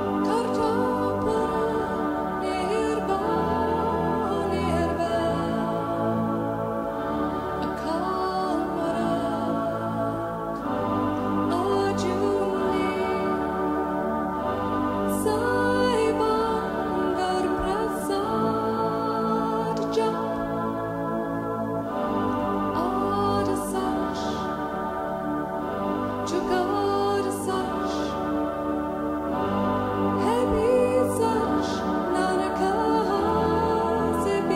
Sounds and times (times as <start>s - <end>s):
Music: 0.0s - 34.5s.